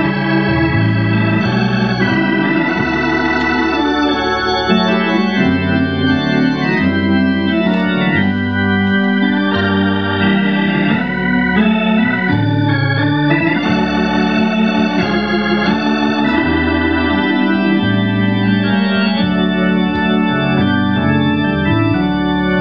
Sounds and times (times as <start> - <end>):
Organ: 0.0 - 22.6.